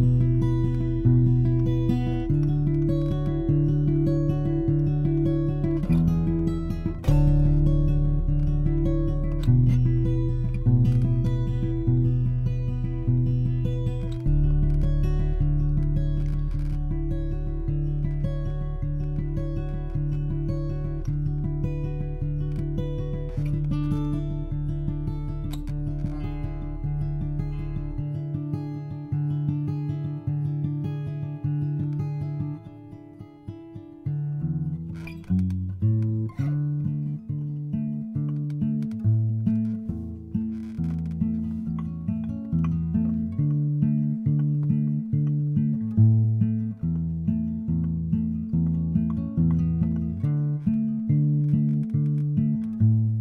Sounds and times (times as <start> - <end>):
Acoustic guitar: 0.0 - 53.2.